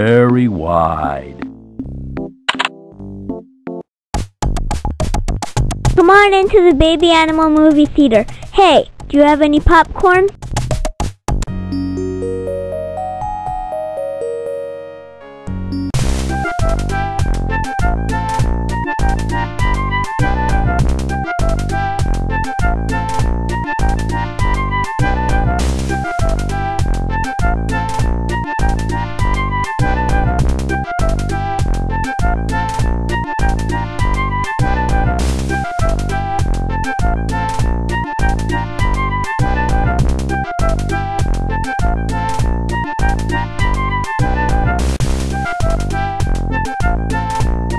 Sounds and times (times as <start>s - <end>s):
Music: 0.0s - 7.8s, 9.5s - 47.7s.